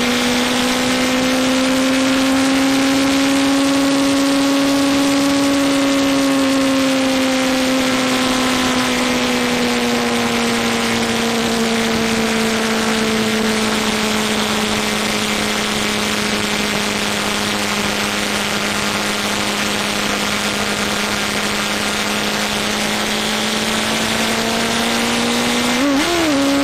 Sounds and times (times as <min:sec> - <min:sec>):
Motor vehicle (road): 0:00.0 - 0:26.6.